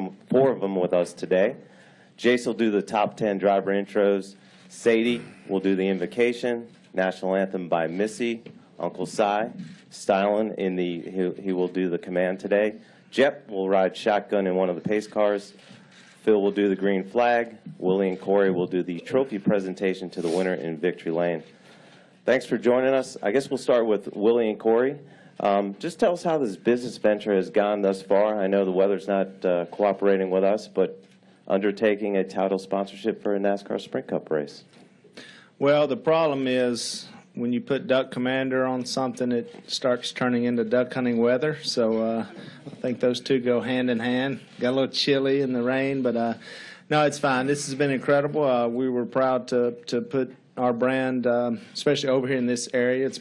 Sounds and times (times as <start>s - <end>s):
Speech: 0.0s - 15.6s, 16.2s - 21.5s, 22.2s - 34.8s, 35.6s - 53.2s.